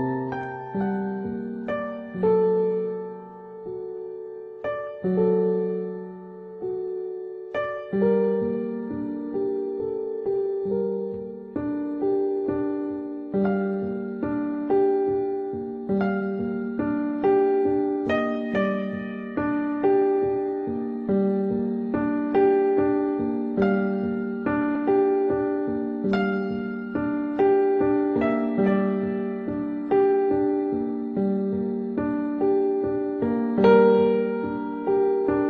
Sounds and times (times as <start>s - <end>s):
Music: 0.0s - 35.4s.